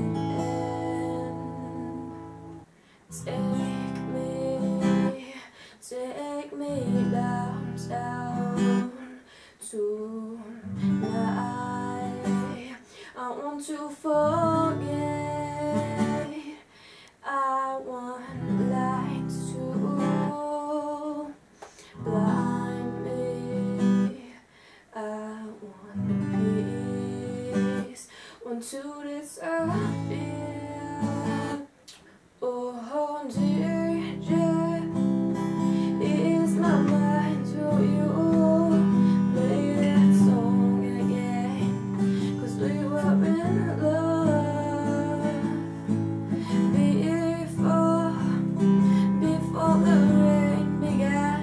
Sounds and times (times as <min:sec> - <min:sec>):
Acoustic guitar: 0:00.0 - 0:24.3, 0:24.9 - 0:32.2, 0:32.8 - 0:51.4.